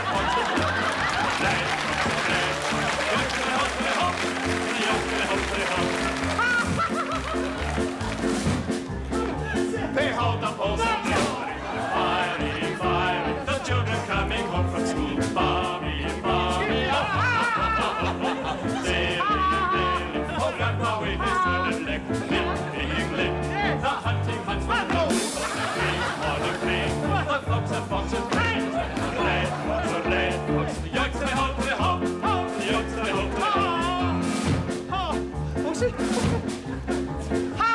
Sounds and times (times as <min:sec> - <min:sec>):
Laughter: 0:00.0 - 0:02.3, 0:06.3 - 0:07.8, 0:16.8 - 0:19.5, 0:25.2 - 0:26.7, 0:28.6 - 0:30.0, 0:35.6 - 0:36.9.